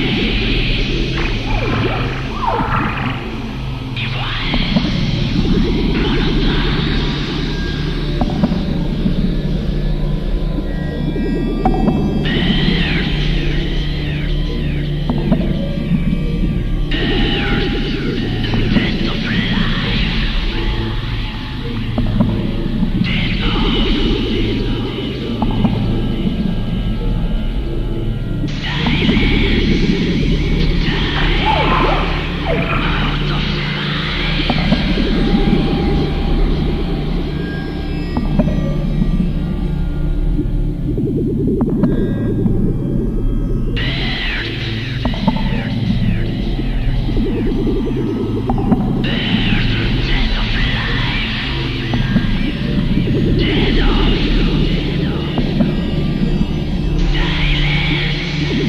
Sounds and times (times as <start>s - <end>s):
Ambient music: 0.0s - 58.6s.